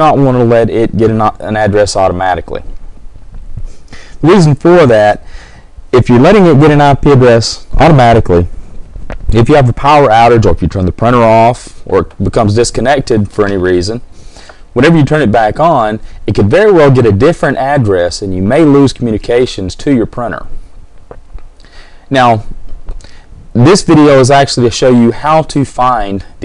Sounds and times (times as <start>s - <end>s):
Speech: 0.0s - 2.7s, 4.2s - 5.2s, 5.9s - 8.5s, 9.3s - 14.0s, 14.8s - 20.5s, 22.1s - 22.5s, 23.6s - 26.4s.